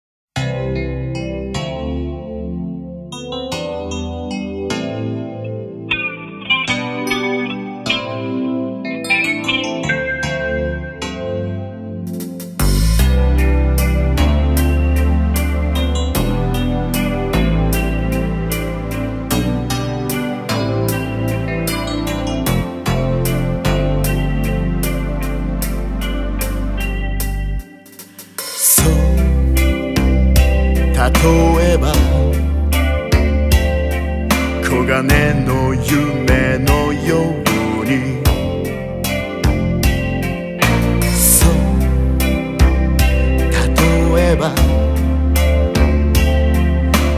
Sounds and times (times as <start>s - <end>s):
Electric piano: 0.4s - 47.1s.